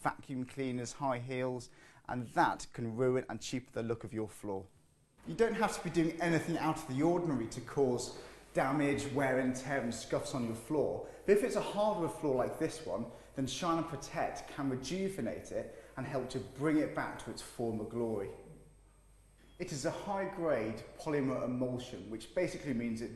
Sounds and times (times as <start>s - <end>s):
Speech: 0.0s - 18.6s, 19.6s - 23.1s.